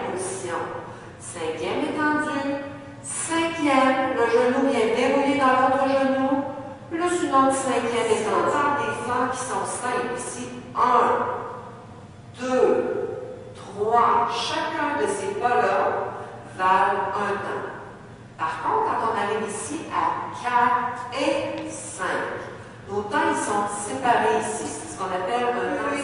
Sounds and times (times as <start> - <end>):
Speech: 0.0 - 11.4, 12.4 - 13.0, 13.6 - 17.8, 18.4 - 26.0.